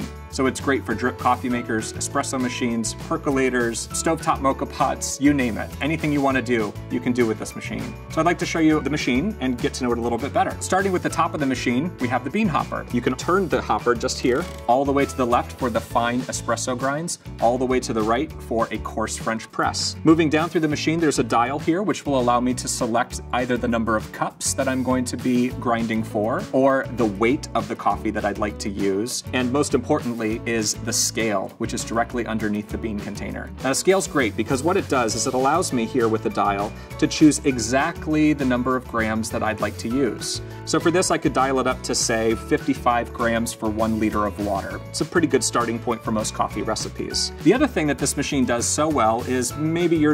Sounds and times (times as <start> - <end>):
Music: 0.0 - 50.1
Speech: 0.0 - 50.1.